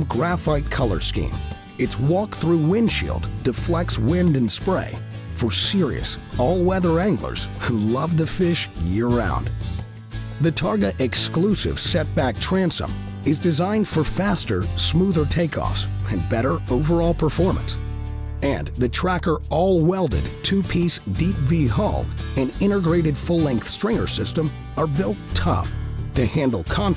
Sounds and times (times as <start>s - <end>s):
Speech: 0.0s - 9.5s, 10.4s - 17.8s, 18.4s - 26.9s
Music: 0.0s - 26.9s.